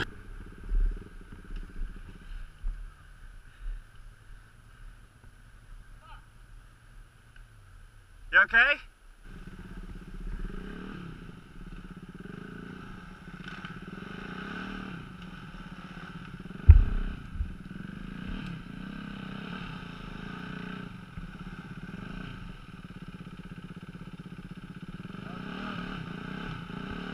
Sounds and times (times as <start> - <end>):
Speech: 8.3 - 8.9.